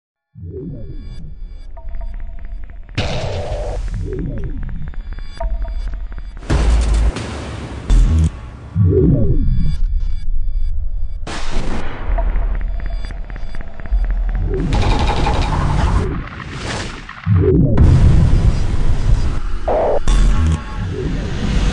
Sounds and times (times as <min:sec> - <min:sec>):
Music: 0:00.2 - 0:21.7.